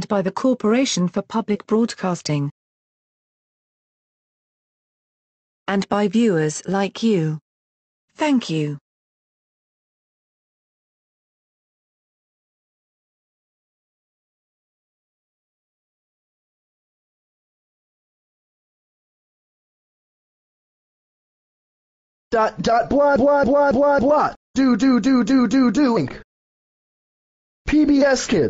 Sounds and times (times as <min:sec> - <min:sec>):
Speech: 0:00.0 - 0:02.6, 0:05.7 - 0:07.4, 0:08.2 - 0:08.8, 0:22.4 - 0:26.2, 0:27.7 - 0:28.4.